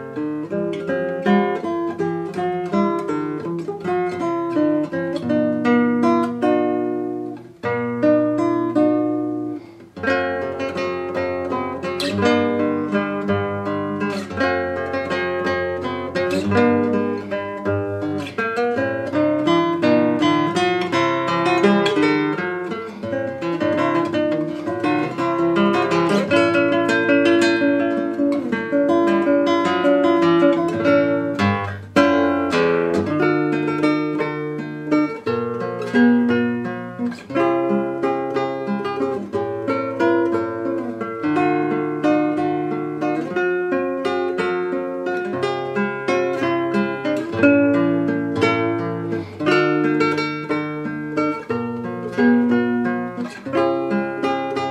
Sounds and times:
Acoustic guitar: 0:00.0 - 0:54.7.

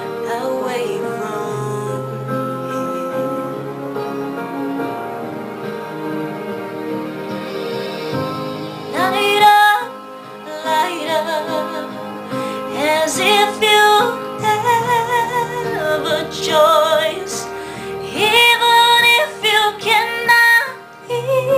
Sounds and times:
Singing: 0:09.0 - 0:21.5.

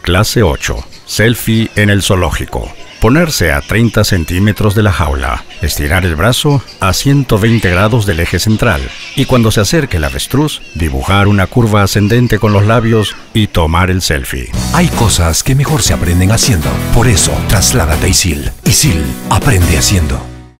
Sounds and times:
Speech: 0:00.0 - 0:20.3
Music: 0:14.5 - 0:20.5.

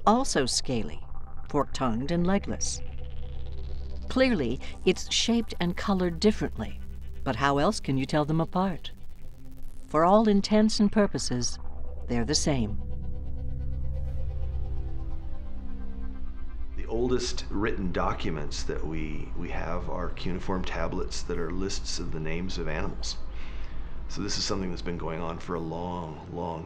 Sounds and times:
Speech: 0:00.0 - 0:02.8, 0:04.1 - 0:08.9, 0:10.0 - 0:12.8, 0:16.8 - 0:23.2, 0:24.1 - 0:26.6
Inside, small room: 0:00.0 - 0:26.6
Music: 0:00.0 - 0:26.6.

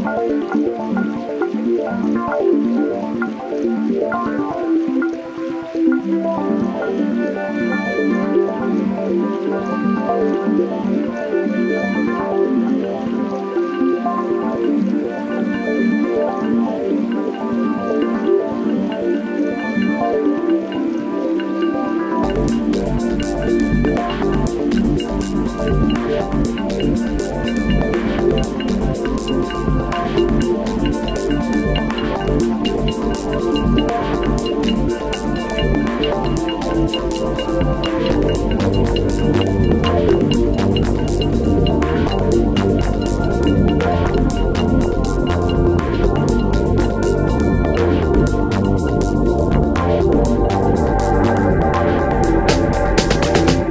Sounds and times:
Music: 0:00.0 - 0:53.7
Water: 0:00.0 - 0:53.7.

